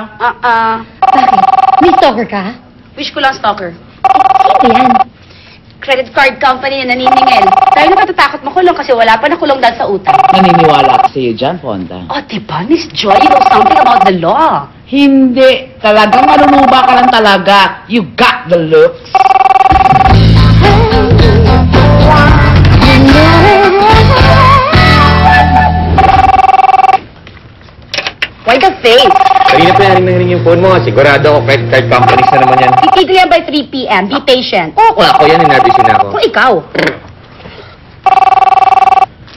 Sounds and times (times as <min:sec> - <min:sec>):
Music: 0:19.9 - 0:26.2, 0:30.0 - 0:32.4.